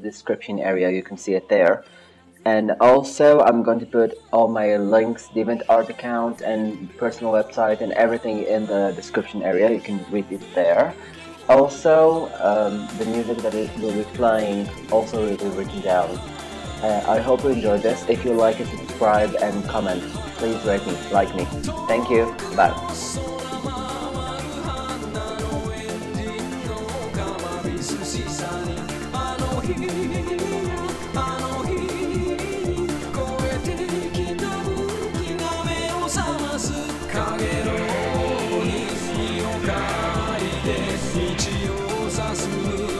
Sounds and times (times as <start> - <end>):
Speech: 0.0 - 1.8, 2.4 - 16.2, 16.8 - 23.2
Music: 0.0 - 42.9.